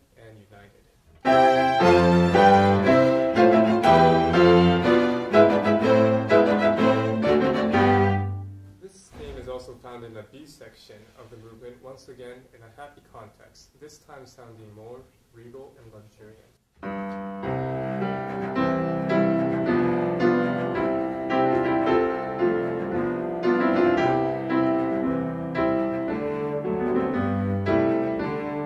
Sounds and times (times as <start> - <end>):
Speech: 0.0 - 0.9, 8.8 - 16.6
Music: 1.1 - 8.9, 16.8 - 28.6.